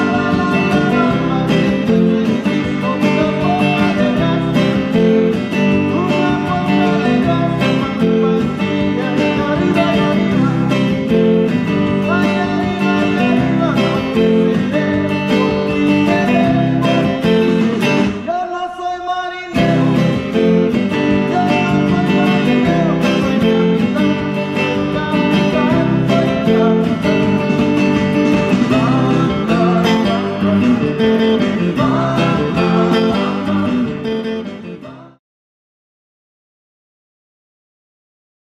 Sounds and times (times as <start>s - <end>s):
Strum: 19.6s - 34.8s.